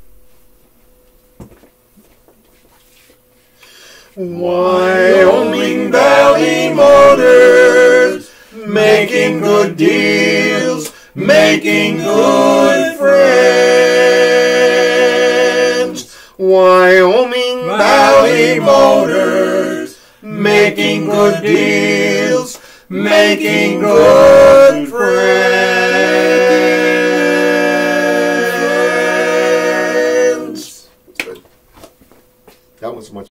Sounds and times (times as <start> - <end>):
Speech: 32.8 - 33.3.